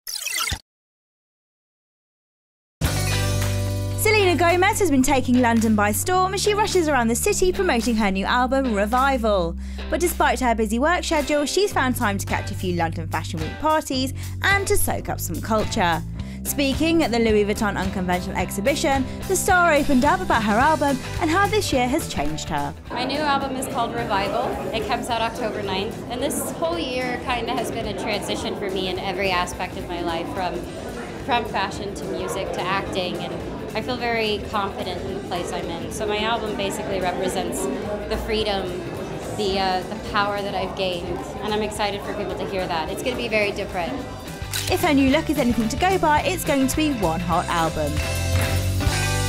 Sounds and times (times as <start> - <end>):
Music: 2.8 - 49.2
Speech: 4.0 - 30.7, 31.3 - 44.0, 44.7 - 48.0.